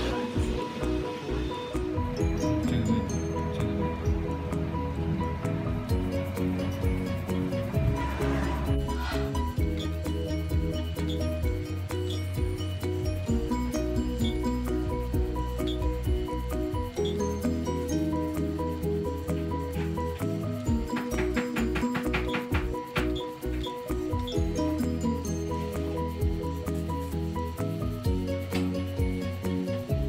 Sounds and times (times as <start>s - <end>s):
Music: 0.0s - 30.0s.